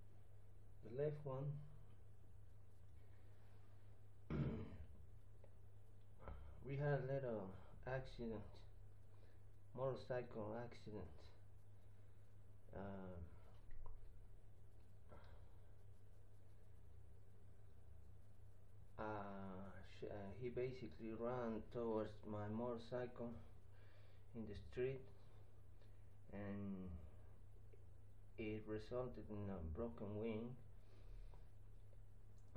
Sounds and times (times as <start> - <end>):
Speech: 0.8 - 1.8, 6.6 - 8.7, 9.7 - 11.4, 12.7 - 13.5, 19.0 - 23.5, 24.3 - 25.2, 26.3 - 27.1, 28.4 - 30.7.